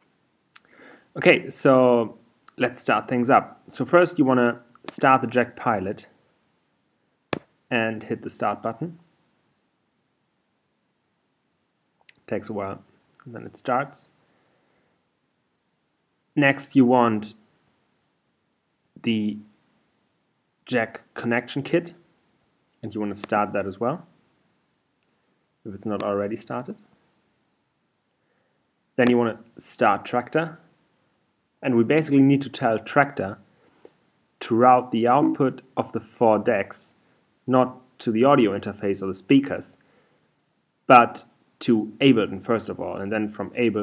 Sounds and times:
Inside, small room: 0.0s - 43.8s
Speech: 1.2s - 6.2s, 7.7s - 9.1s, 12.1s - 14.2s, 16.4s - 17.5s, 19.0s - 19.6s, 20.7s - 22.0s, 22.8s - 24.1s, 25.6s - 26.9s, 29.0s - 30.7s, 31.6s - 33.5s, 34.4s - 39.8s, 40.9s - 43.8s.

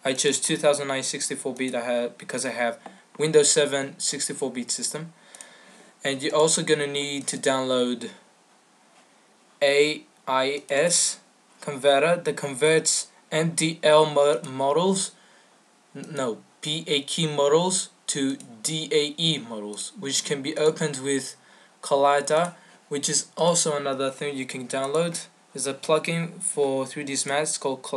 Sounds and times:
Speech: 0.0s - 5.2s, 6.0s - 8.2s, 9.6s - 15.2s, 15.9s - 27.9s.

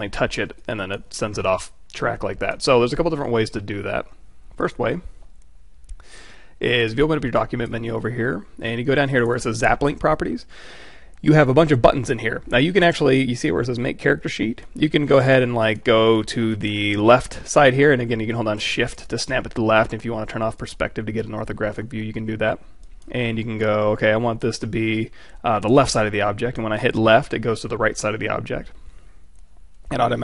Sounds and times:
Speech: 0.0s - 5.1s, 6.6s - 10.5s, 11.2s - 28.8s, 29.9s - 30.2s.

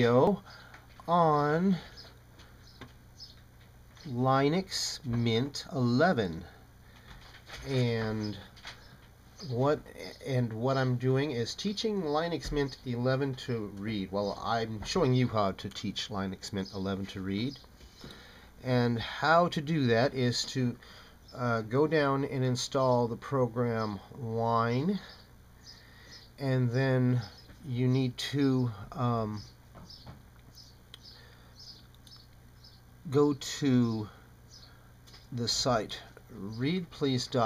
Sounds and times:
Male speech, man speaking: 0.0s - 0.4s, 1.1s - 1.9s, 4.0s - 6.5s, 7.6s - 8.4s, 9.4s - 17.6s, 18.6s - 20.8s, 21.4s - 25.1s, 26.4s - 29.5s, 33.1s - 34.1s, 35.3s - 37.4s
Narration, monologue: 0.0s - 37.4s.

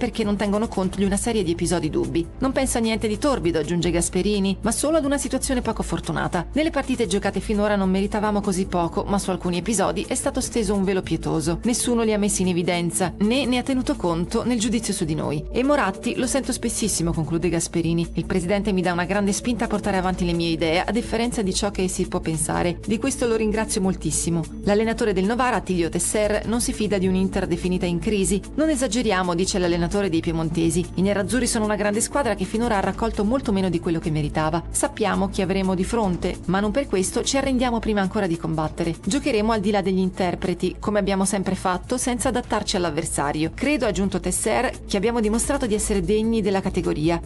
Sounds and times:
Music: 0.0s - 47.2s
Speech: 0.0s - 47.2s.

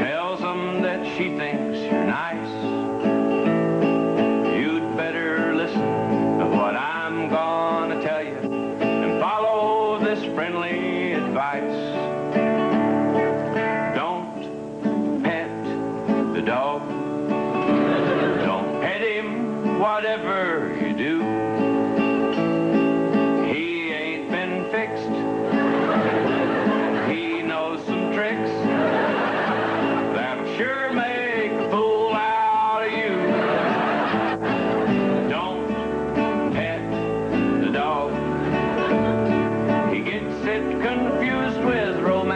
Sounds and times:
Music: 0.0s - 42.3s.

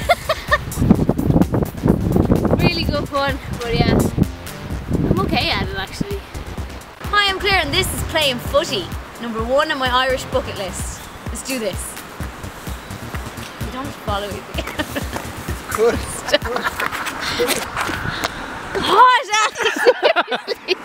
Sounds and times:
Music: 0.0s - 17.4s
Speech: 7.1s - 11.9s.

